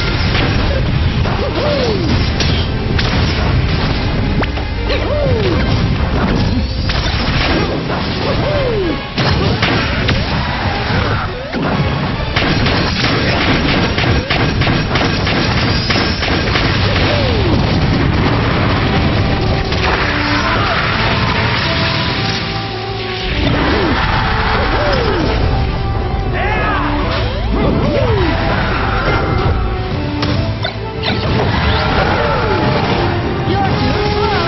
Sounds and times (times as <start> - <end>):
Smash, crash: 0.0 - 25.5
Music: 0.0 - 34.4.